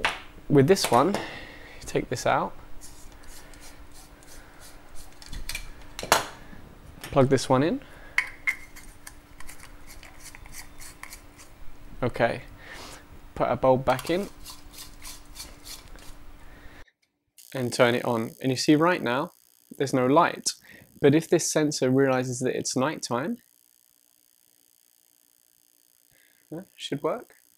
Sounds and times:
Speech: 0.5s - 1.2s, 1.9s - 2.5s, 7.2s - 7.8s, 12.0s - 12.5s, 13.4s - 14.3s, 17.6s - 23.4s, 26.5s - 27.3s.

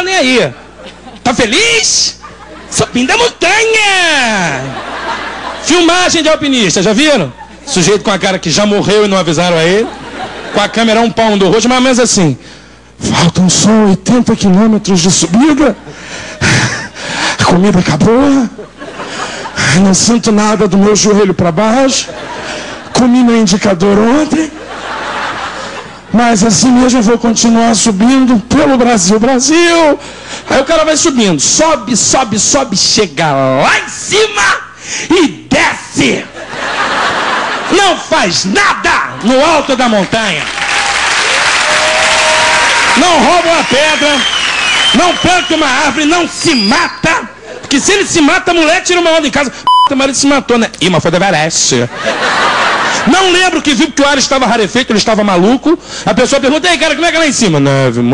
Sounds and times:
Speech: 0.0s - 0.6s, 1.2s - 4.8s, 5.6s - 9.9s, 10.6s - 12.4s, 13.0s - 15.8s, 17.4s - 18.6s, 19.6s - 22.1s, 23.0s - 24.6s, 26.1s - 36.4s, 37.7s - 40.5s, 43.0s - 44.3s, 45.0s - 51.9s, 53.1s - 58.1s.

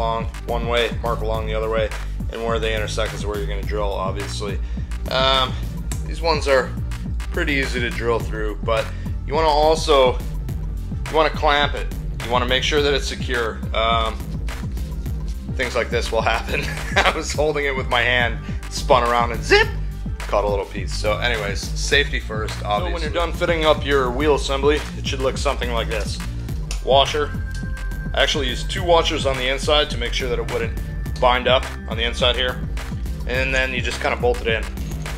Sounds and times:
Speech: 0.0s - 10.2s, 11.1s - 14.2s, 15.6s - 27.4s, 28.2s - 32.6s, 33.3s - 34.7s
Music: 0.0s - 35.1s.

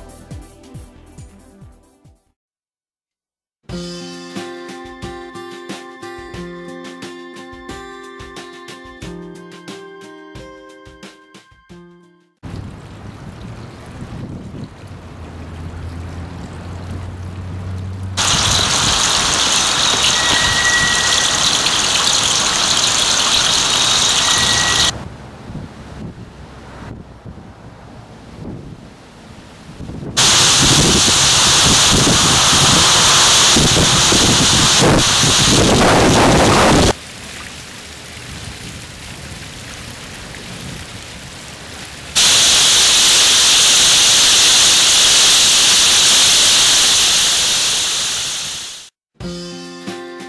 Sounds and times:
Whistling: 18.6s - 24.9s.

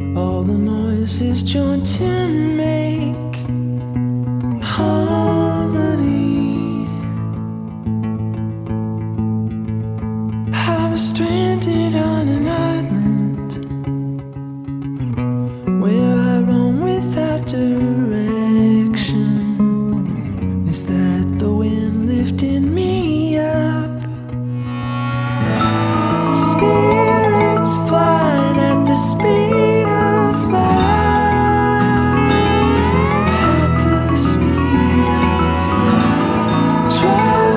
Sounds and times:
Music: 0.0s - 37.5s.

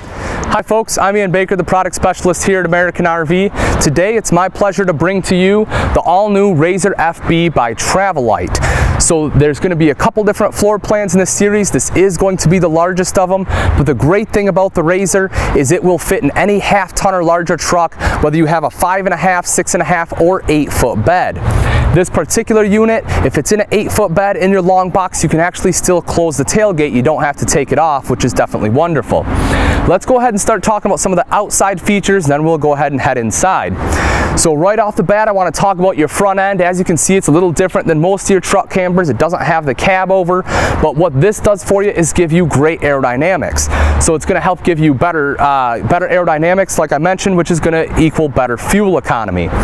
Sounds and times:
Speech: 0.5s - 33.8s, 34.4s - 49.6s.

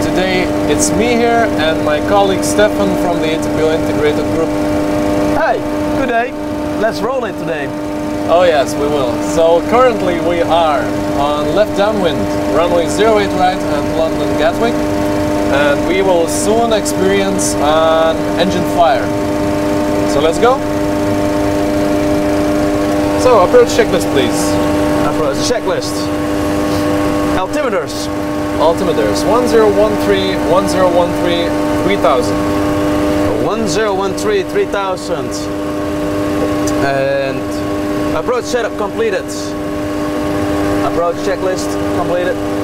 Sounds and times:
Speech: 0.0s - 4.5s, 5.4s - 7.7s, 8.3s - 14.8s, 15.5s - 19.1s, 20.1s - 20.6s, 23.2s - 26.1s, 27.4s - 32.4s, 33.3s - 35.5s, 36.5s - 37.6s, 38.2s - 39.6s, 40.8s - 42.4s
Heavy engine (low frequency): 0.0s - 42.6s
Vehicle: 0.0s - 42.6s.

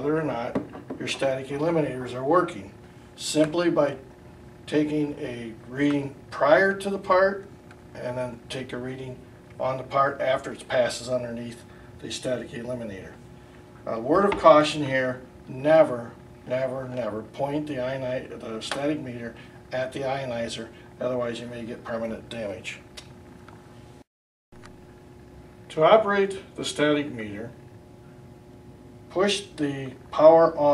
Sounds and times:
Speech: 0.0s - 4.0s, 4.7s - 13.2s, 13.8s - 22.9s, 25.7s - 27.6s, 29.1s - 30.7s.

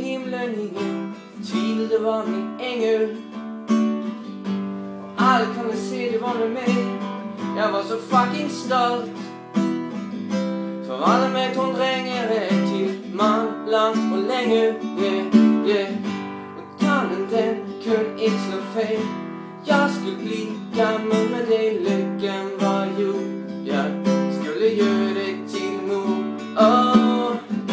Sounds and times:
Acoustic guitar: 0.0s - 27.7s.

